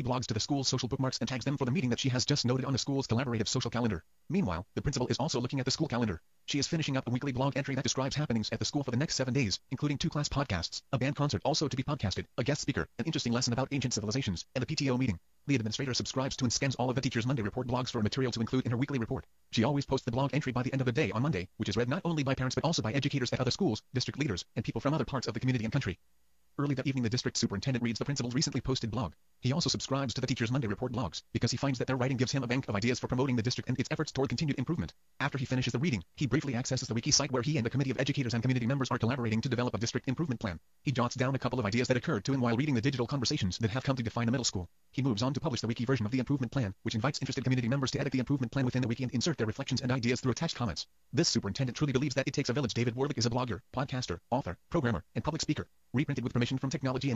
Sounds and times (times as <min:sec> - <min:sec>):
Speech synthesizer: 0:00.0 - 0:26.0, 0:26.6 - 0:57.1.